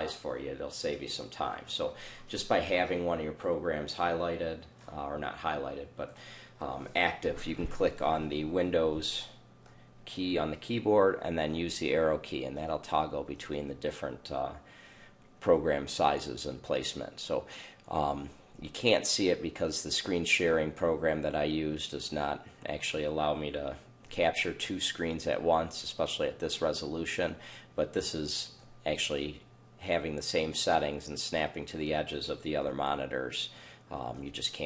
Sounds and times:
Speech: 0.0s - 9.4s, 10.0s - 14.7s, 15.4s - 34.6s.

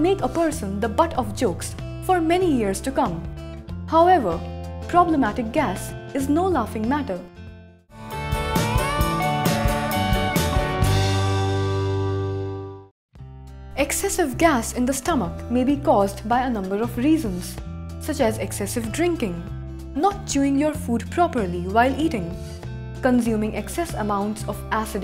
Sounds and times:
Speech: 0.0s - 3.3s, 3.9s - 7.3s, 13.8s - 22.4s, 23.0s - 25.0s
Music: 0.0s - 25.0s.

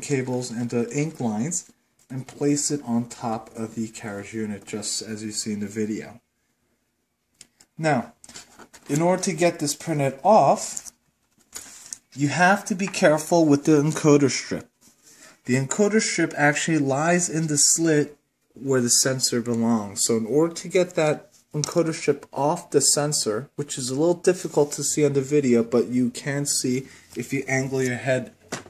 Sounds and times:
Speech: 0.0s - 6.2s, 7.8s - 8.2s, 8.9s - 10.9s, 12.1s - 14.8s, 15.5s - 28.4s.

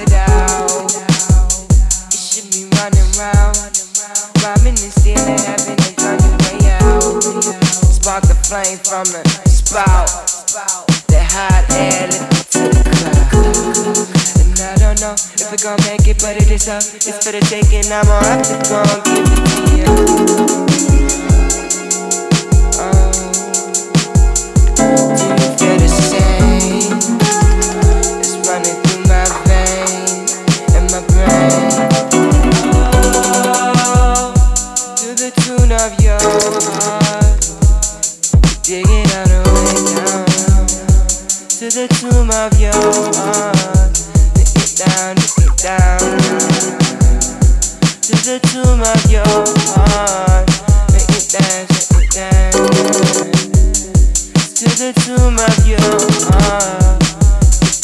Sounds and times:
Music: 0.0s - 57.8s.

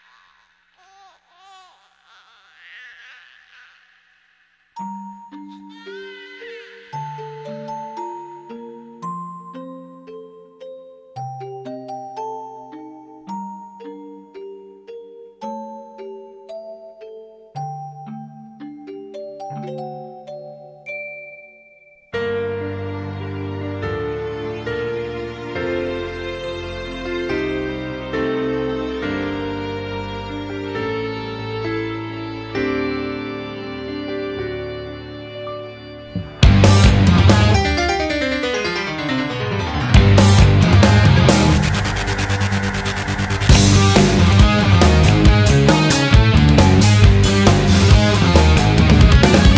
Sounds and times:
Music: 4.8s - 49.5s.

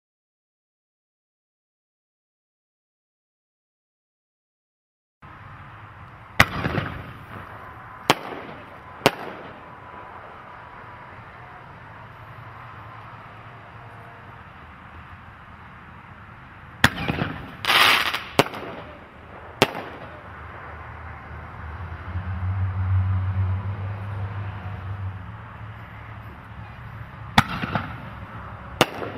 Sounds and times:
Outside, urban or manmade: 5.2s - 29.1s
Firecracker: 6.4s - 10.8s, 16.8s - 21.2s, 26.6s - 29.1s.

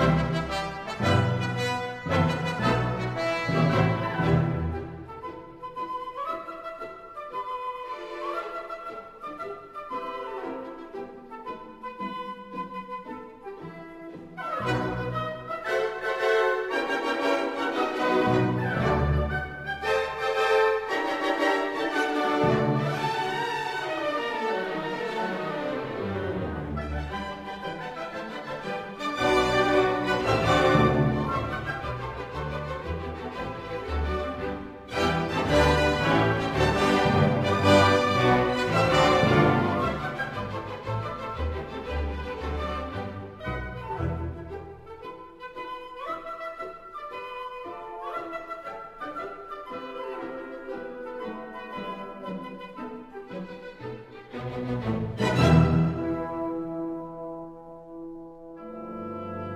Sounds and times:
Orchestra: 0.0s - 59.5s.

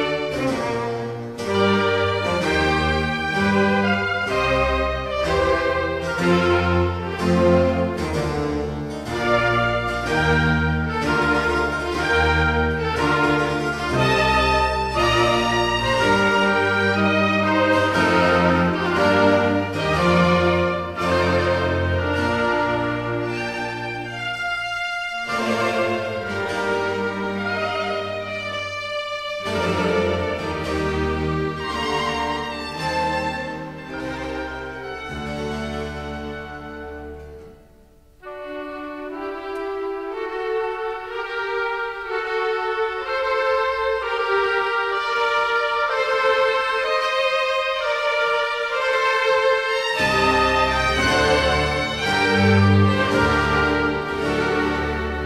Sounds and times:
Music: 0.0s - 55.2s.

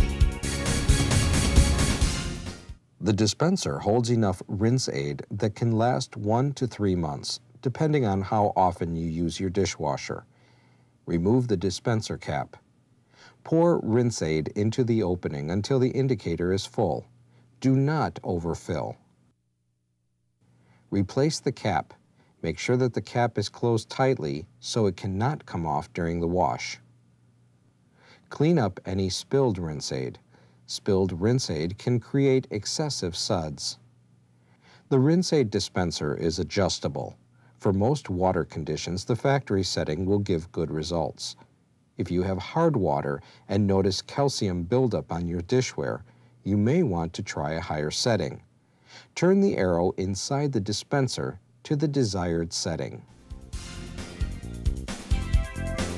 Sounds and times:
Speech: 3.0s - 10.3s, 11.1s - 12.6s, 13.4s - 19.1s, 20.9s - 26.9s, 28.3s - 33.9s, 34.9s - 48.5s, 49.2s - 53.1s.

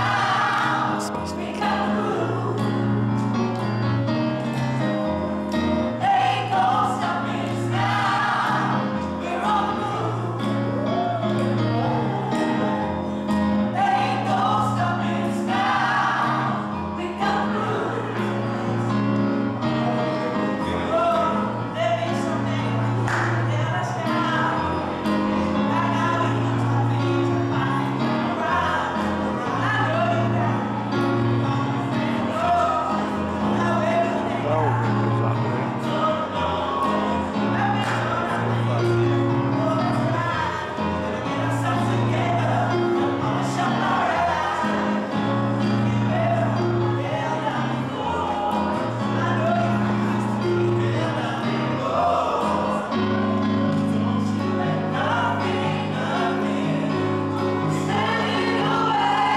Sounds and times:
Music: 0.0s - 59.3s
Male singing: 17.0s - 18.5s, 19.8s - 59.3s.

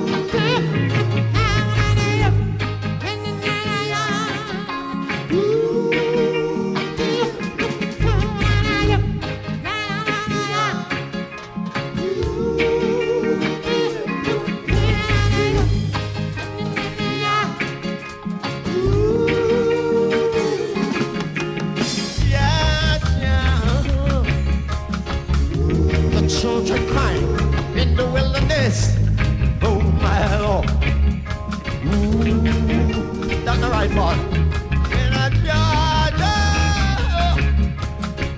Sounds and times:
Ska: 0.0s - 38.3s.

